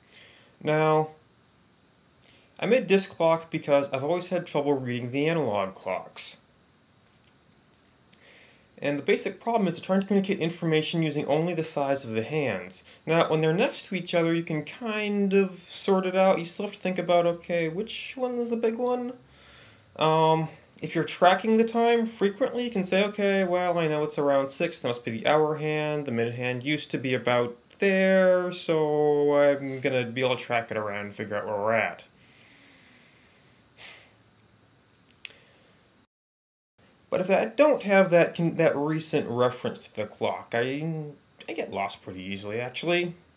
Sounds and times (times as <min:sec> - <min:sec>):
Speech: 0:00.6 - 0:01.2, 0:02.6 - 0:06.5, 0:08.8 - 0:19.2, 0:20.0 - 0:32.1, 0:37.1 - 0:43.2.